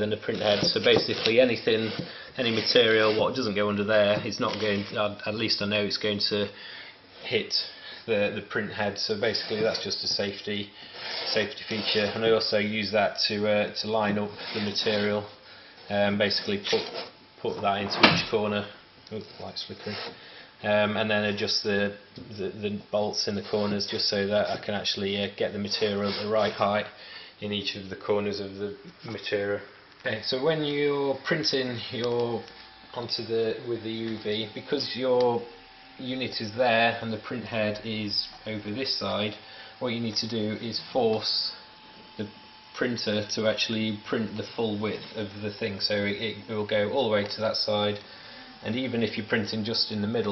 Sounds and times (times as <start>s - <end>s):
Speech: 0.0s - 6.6s, 7.2s - 41.6s, 42.2s - 50.3s.